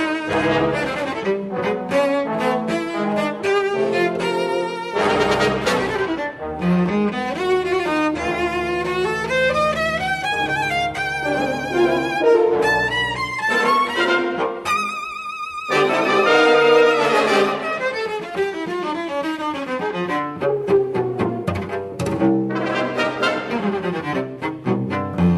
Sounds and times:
Cello: 0.0 - 25.3.

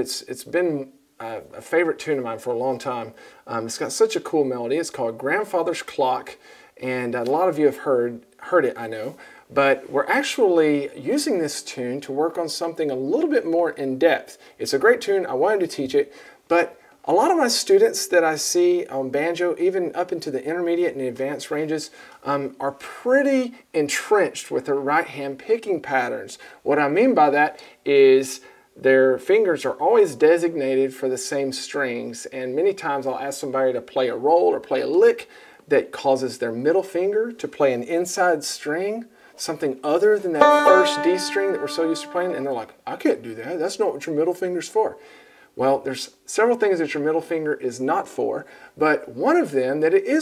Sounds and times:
Speech: 0.0 - 45.0, 45.6 - 50.2.

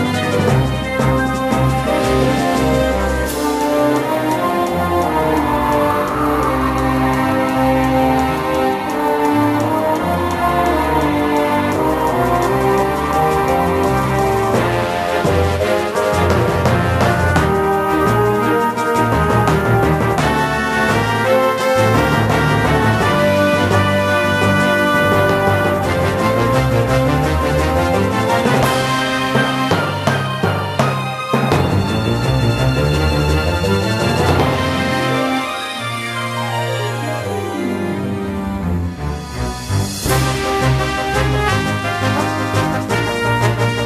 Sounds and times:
Music: 0.0 - 43.8.

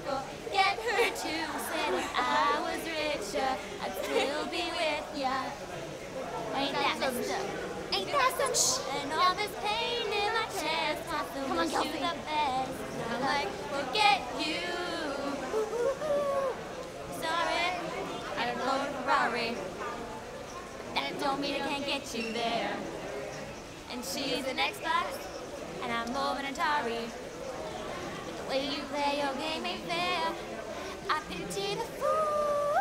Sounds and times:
Female singing: 0.0 - 5.6, 8.0 - 19.6, 21.0 - 22.8, 23.9 - 27.2, 28.4 - 32.8.

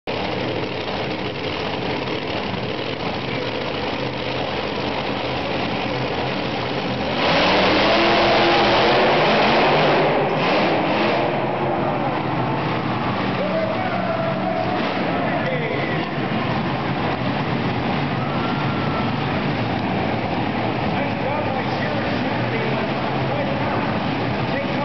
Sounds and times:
Truck: 0.0 - 24.8.

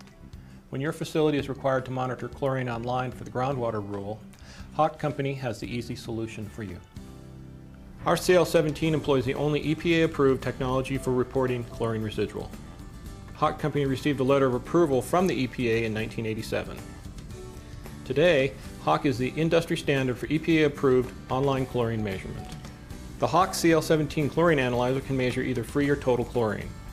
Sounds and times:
Music: 0.0 - 26.9
Speech: 0.7 - 4.2, 4.8 - 6.8, 8.0 - 12.6, 13.4 - 16.8, 18.1 - 22.5, 23.2 - 26.7.

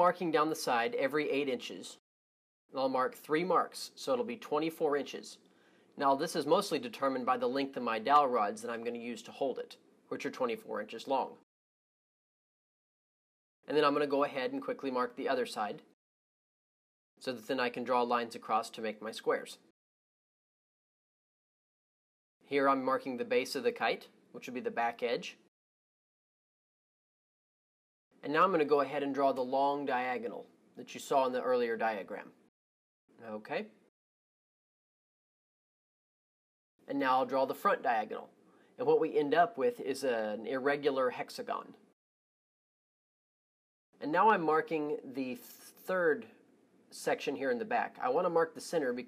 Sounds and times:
Speech: 0.0 - 2.0, 2.7 - 5.4, 6.0 - 11.5, 13.7 - 16.0, 17.2 - 19.7, 22.5 - 25.5, 28.2 - 32.4, 33.2 - 33.8, 36.9 - 41.8, 44.0 - 49.0.

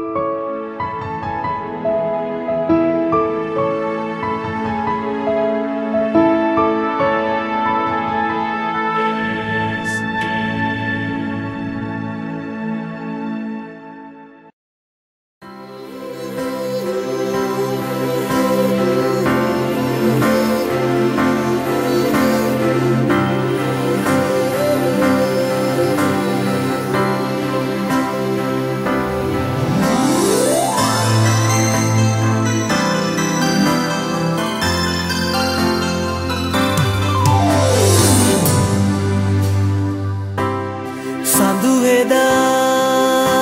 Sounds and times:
Music: 0.0 - 14.6, 15.4 - 43.4.

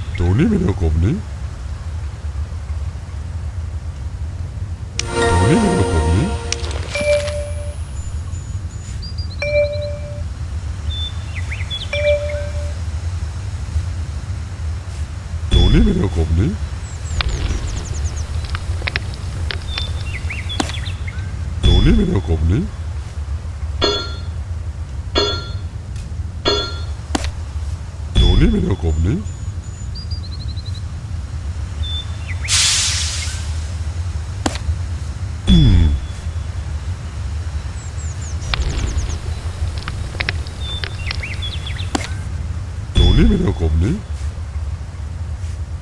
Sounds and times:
Speech: 0.0 - 1.3, 5.1 - 6.4, 15.5 - 16.7, 21.6 - 22.8, 28.2 - 29.3, 35.5 - 36.2, 43.0 - 44.1
Music: 5.0 - 7.8.

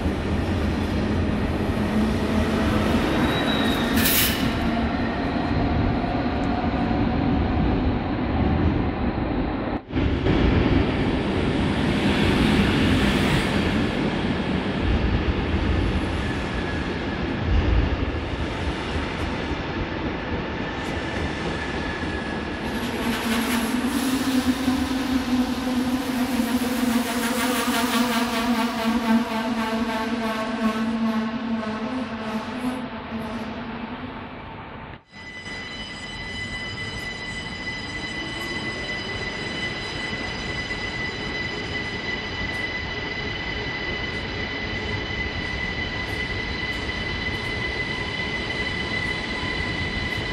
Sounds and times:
Bus: 0.0 - 20.2, 20.8 - 35.1.

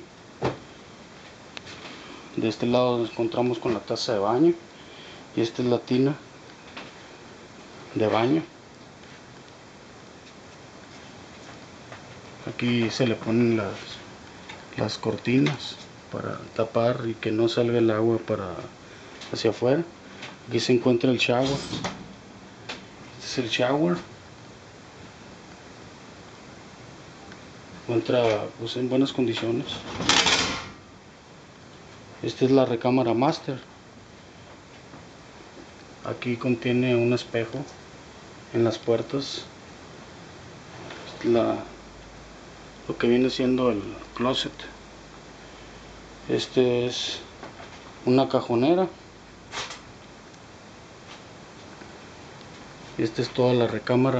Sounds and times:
Inside, small room: 0.0 - 54.1
Speech: 2.4 - 4.6, 5.4 - 6.2, 7.9 - 8.6, 12.4 - 14.1, 14.7 - 21.8, 23.2 - 24.1, 27.8 - 29.9, 32.2 - 33.7, 36.0 - 37.7, 38.5 - 39.5, 41.1 - 41.8, 42.9 - 44.8, 46.2 - 47.3, 48.0 - 49.0, 53.0 - 54.1
Sliding door: 21.4 - 22.1, 29.7 - 30.8.

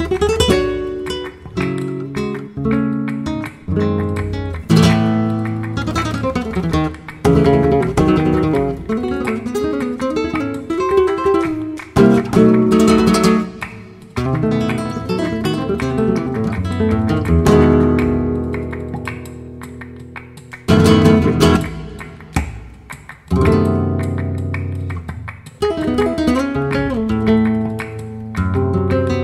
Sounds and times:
Flamenco: 0.0 - 29.2
Strum: 0.0 - 29.2.

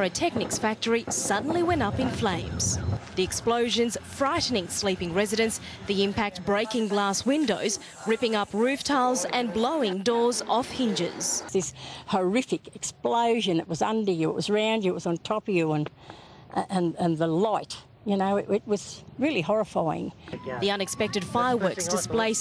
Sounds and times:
Speech: 0.0 - 15.9, 16.6 - 22.4.

